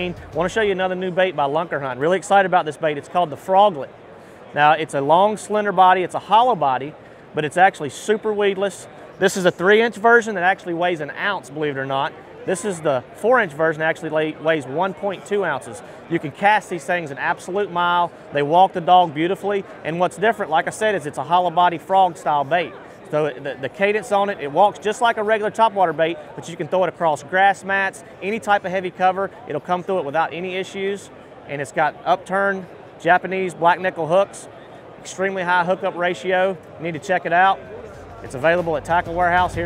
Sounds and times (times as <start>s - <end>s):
Speech: 0.0s - 3.9s, 4.5s - 39.6s.